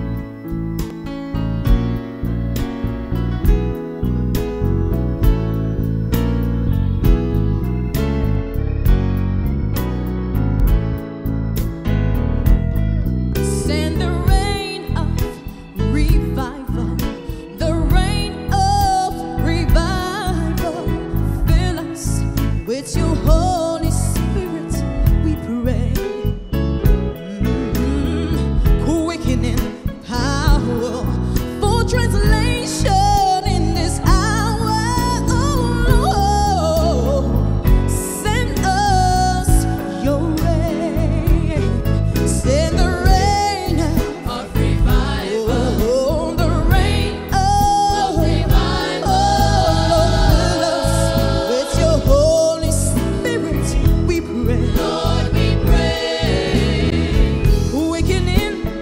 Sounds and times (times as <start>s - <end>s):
Music: 0.0s - 58.8s.